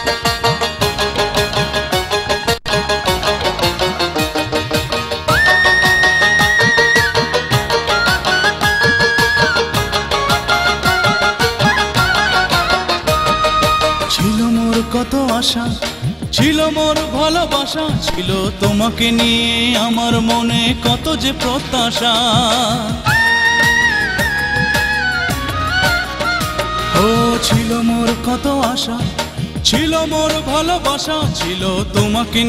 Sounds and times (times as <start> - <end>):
Folk music: 0.0 - 32.4.